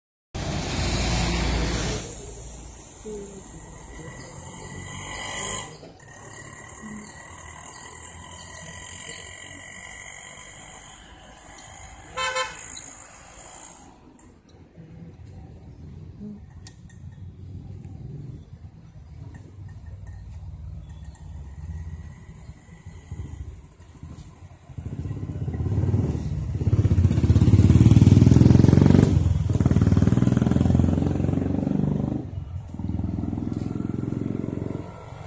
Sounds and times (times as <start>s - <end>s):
Outside, urban or manmade: 0.3s - 35.2s
Vehicle: 0.4s - 35.2s.